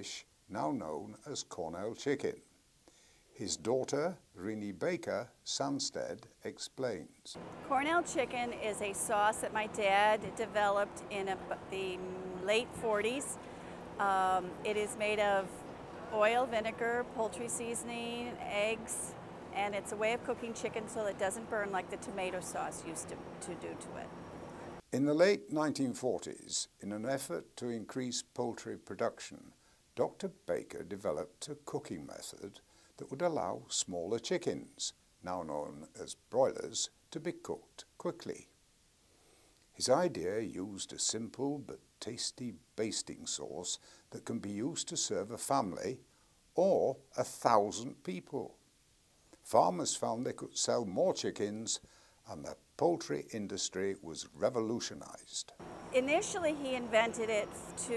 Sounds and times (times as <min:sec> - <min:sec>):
Speech: 0:00.0 - 0:02.4, 0:03.4 - 0:13.4, 0:14.0 - 0:15.5, 0:16.1 - 0:24.1, 0:24.9 - 0:38.5, 0:39.8 - 0:46.0, 0:46.6 - 0:48.6, 0:49.5 - 0:57.9.